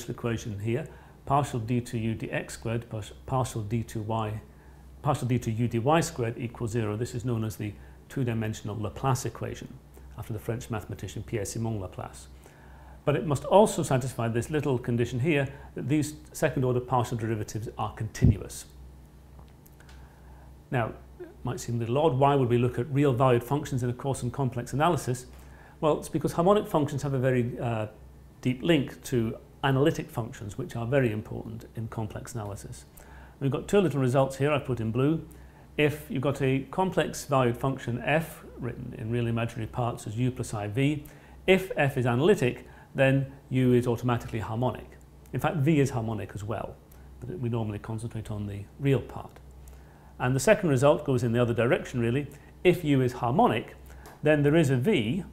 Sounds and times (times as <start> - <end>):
Speech: 0.0 - 12.4, 13.0 - 18.8, 20.7 - 49.4, 50.2 - 55.3.